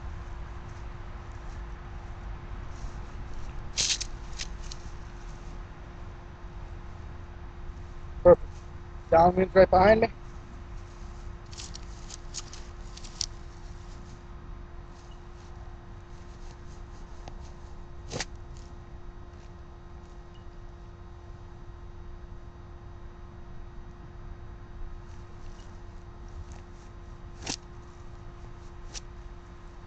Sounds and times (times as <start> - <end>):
Speech: 9.1 - 10.1.